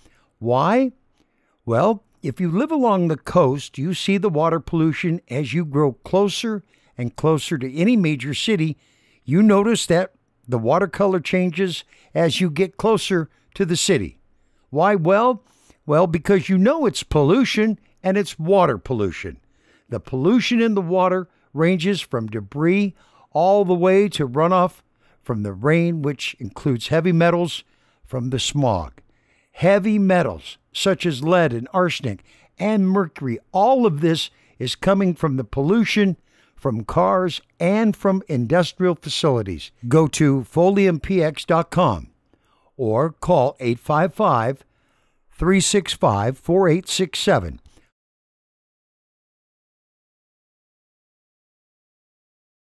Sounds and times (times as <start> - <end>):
Speech: 0.4 - 1.0, 1.7 - 29.0, 29.6 - 42.1, 42.8 - 44.6, 45.4 - 47.7.